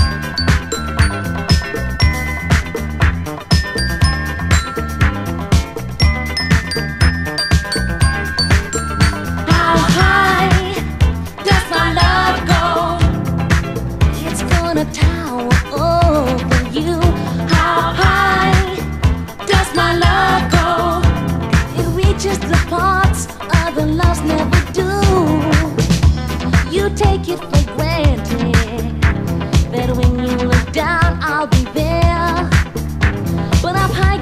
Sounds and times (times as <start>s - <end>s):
Funk: 0.0s - 34.2s.